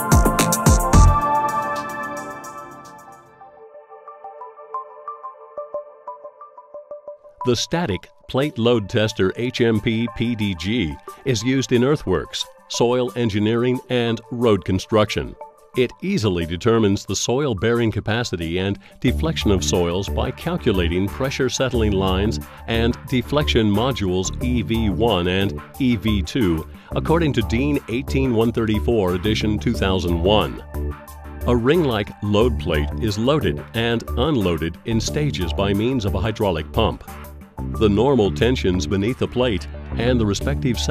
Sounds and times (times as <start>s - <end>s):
Music: 0.0s - 40.9s
Speech: 7.4s - 30.6s, 31.5s - 37.0s, 37.7s - 40.9s.